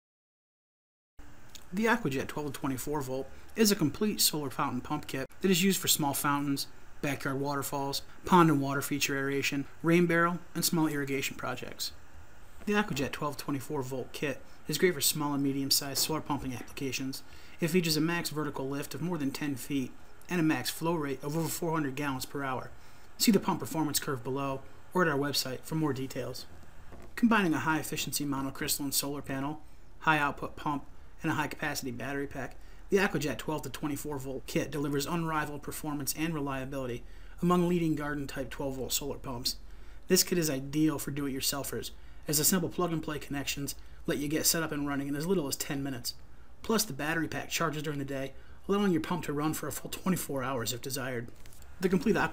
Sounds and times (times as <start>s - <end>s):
Speech: 1.6s - 12.0s, 12.6s - 26.5s, 27.2s - 52.3s.